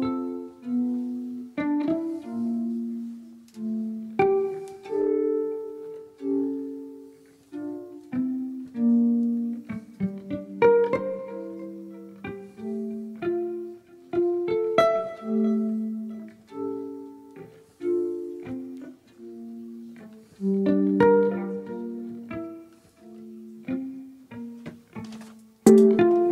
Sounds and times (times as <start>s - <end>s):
Pizzicato: 0.0s - 26.3s.